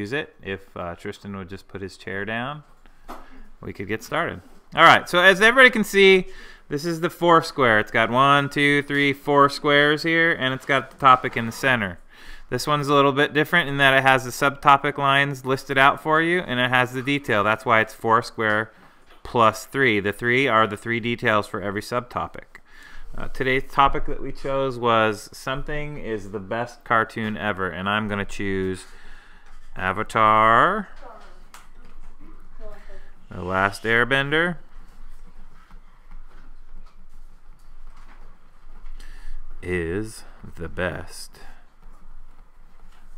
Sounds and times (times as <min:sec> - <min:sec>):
Speech: 0:00.0 - 0:02.6, 0:03.6 - 0:18.7, 0:19.3 - 0:22.6, 0:23.2 - 0:28.9, 0:29.8 - 0:31.3, 0:32.6 - 0:34.6, 0:39.6 - 0:41.6.